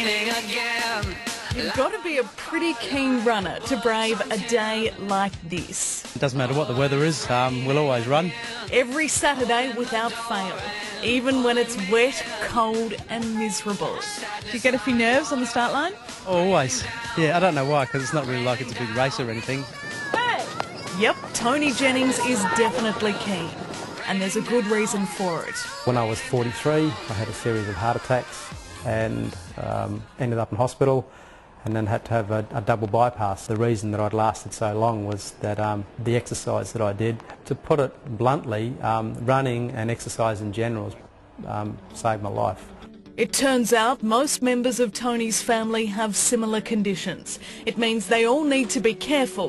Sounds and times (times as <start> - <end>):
Music: 0.0 - 30.9, 39.9 - 49.4
Outside, urban or manmade: 0.0 - 49.4
Speech: 16.3 - 19.7.